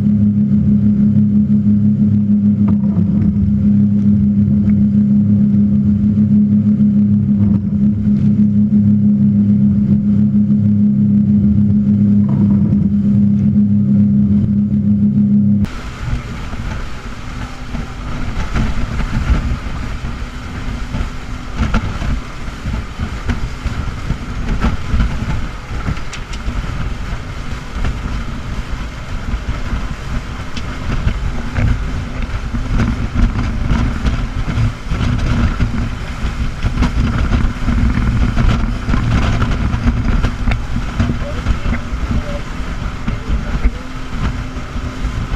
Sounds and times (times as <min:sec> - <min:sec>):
Motorboat, speedboat: 0:00.0 - 0:45.3.